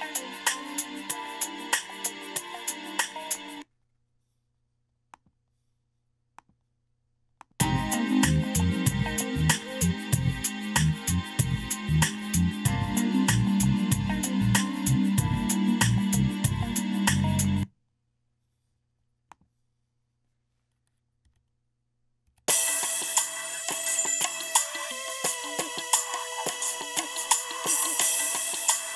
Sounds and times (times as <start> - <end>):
Music: 0.0 - 3.6, 7.6 - 17.7, 22.5 - 28.9.